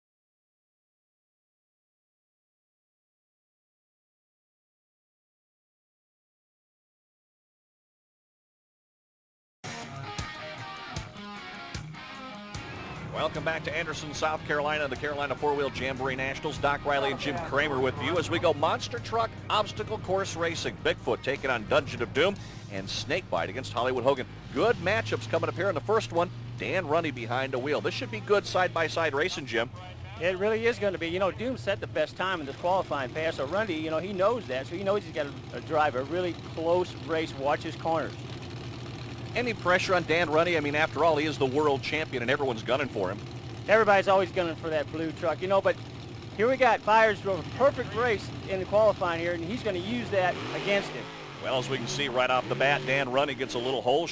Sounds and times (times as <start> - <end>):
Music: 9.6 - 21.4
Vehicle: 11.9 - 54.1
Speech: 13.1 - 38.2, 39.4 - 45.8, 46.4 - 54.1.